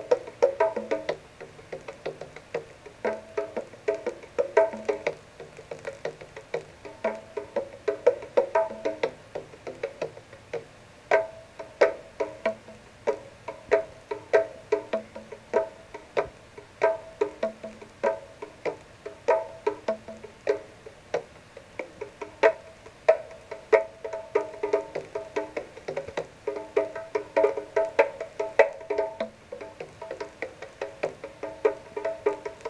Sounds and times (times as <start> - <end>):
Music: 0.0 - 32.7.